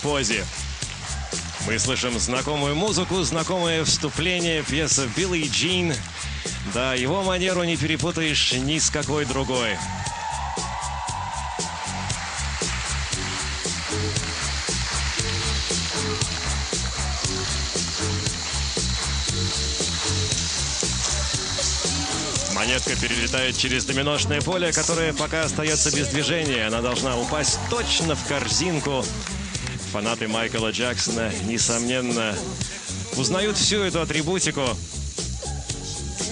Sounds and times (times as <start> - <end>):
Speech: 0.0 - 0.5, 1.6 - 6.1, 6.7 - 9.8, 21.1 - 29.2, 29.9 - 34.8
Music: 0.0 - 36.3.